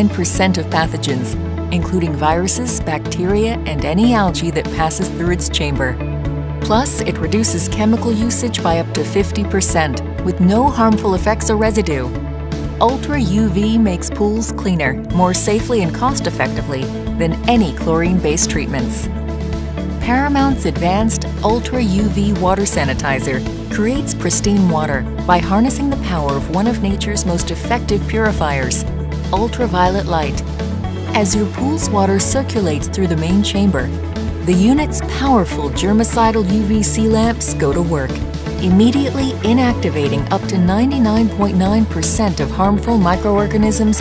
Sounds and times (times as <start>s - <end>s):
Speech: 0.0s - 6.0s, 6.6s - 12.2s, 12.8s - 19.1s, 20.0s - 30.4s, 31.0s - 44.0s
Music: 0.0s - 44.0s.